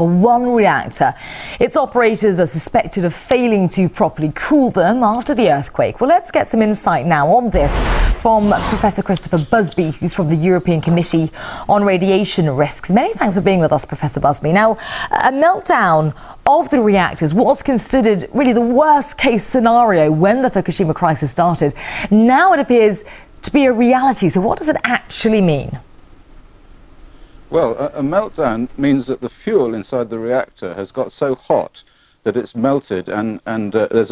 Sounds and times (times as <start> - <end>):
Speech: 27.5 - 34.1.